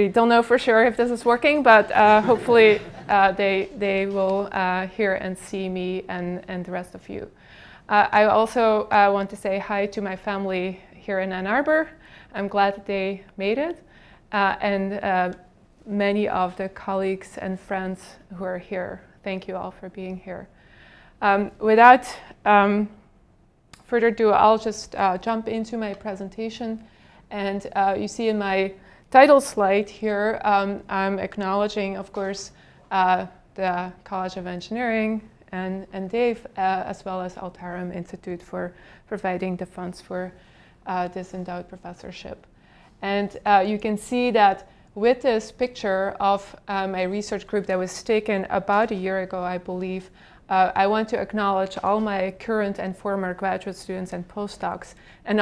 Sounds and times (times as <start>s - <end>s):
Speech: 0.0s - 7.3s, 7.9s - 13.8s, 14.4s - 20.5s, 21.2s - 23.0s, 23.8s - 55.4s.